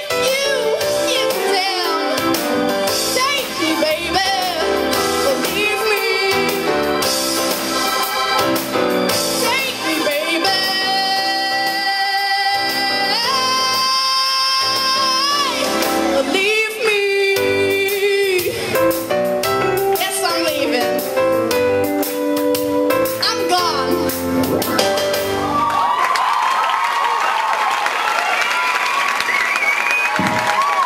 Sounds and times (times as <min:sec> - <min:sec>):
Female singing: 0:00.0 - 0:02.3, 0:03.2 - 0:06.7, 0:09.4 - 0:18.6
Music: 0:00.0 - 0:26.1.